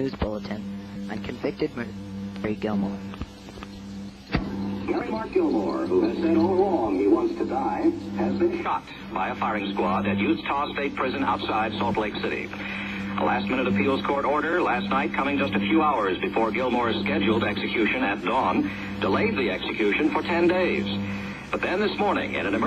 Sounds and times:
Speech: 0.0 - 3.0, 4.9 - 12.6, 13.2 - 21.0, 21.6 - 22.6.

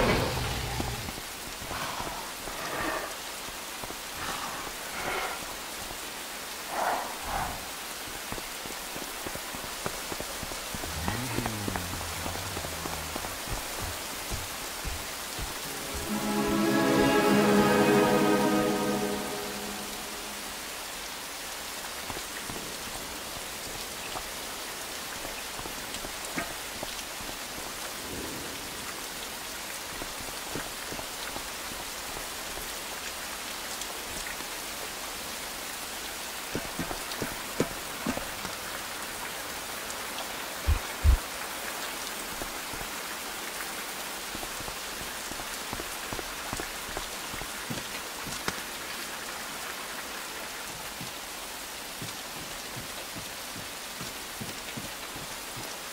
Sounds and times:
Rain on surface: 0.0 - 55.9
Music: 15.6 - 20.7.

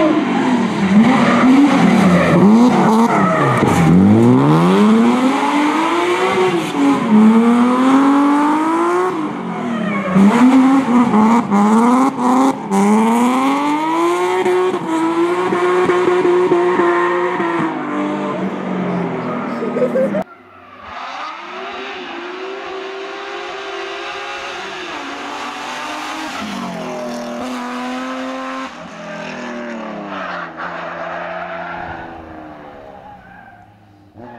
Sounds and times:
Skidding: 0.0 - 34.3.

